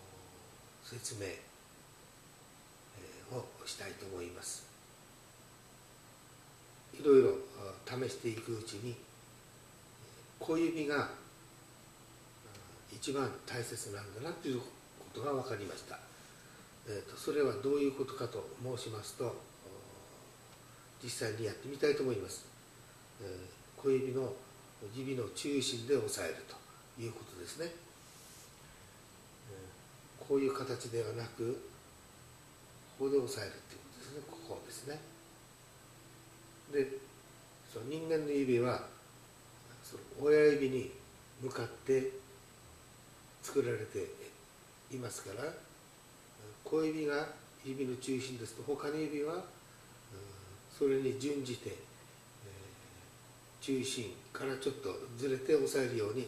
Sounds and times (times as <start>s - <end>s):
Speech: 0.0s - 1.5s, 2.9s - 4.8s, 6.9s - 9.1s, 10.4s - 11.3s, 12.4s - 16.2s, 16.8s - 20.4s, 21.0s - 22.6s, 23.2s - 27.9s, 29.4s - 31.8s, 32.9s - 35.2s, 36.6s - 39.0s, 39.7s - 42.4s, 43.4s - 45.7s, 46.4s - 53.0s, 53.6s - 56.2s.